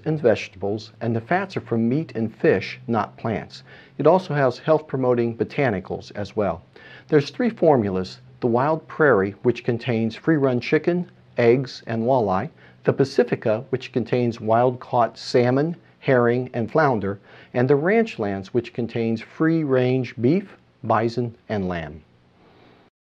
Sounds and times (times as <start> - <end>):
Speech: 0.0 - 22.1.